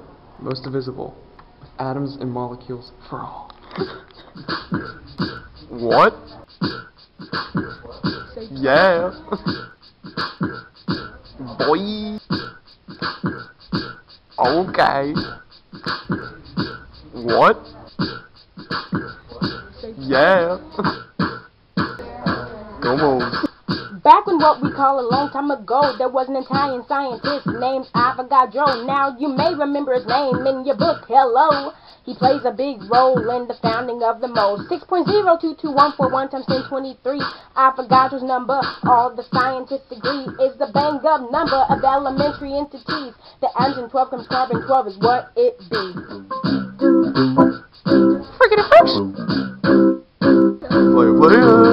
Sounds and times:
Music: 1.6s - 51.7s.

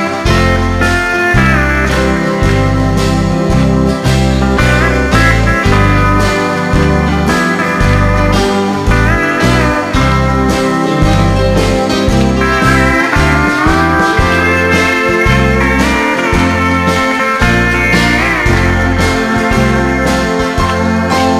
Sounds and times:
Music: 0.0s - 21.3s.

